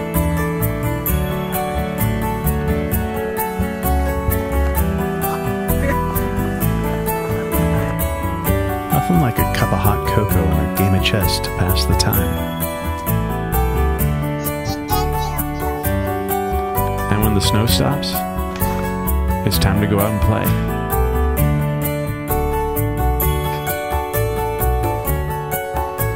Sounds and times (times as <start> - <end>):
Music: 0.0 - 26.1
Speech: 8.9 - 12.3, 17.1 - 18.2, 19.4 - 20.6.